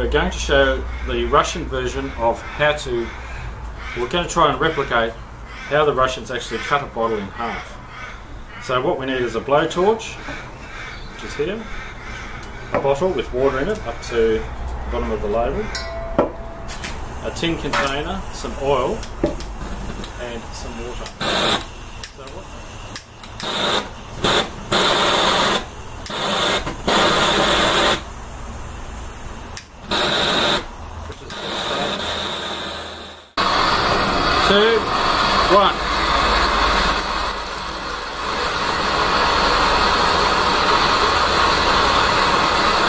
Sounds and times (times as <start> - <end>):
Speech: 0.0 - 3.2, 4.0 - 7.7, 8.6 - 10.2, 11.2 - 11.7, 12.8 - 15.7, 17.2 - 19.0, 20.2 - 21.2, 22.1 - 22.7, 31.1 - 32.0, 34.4 - 35.9.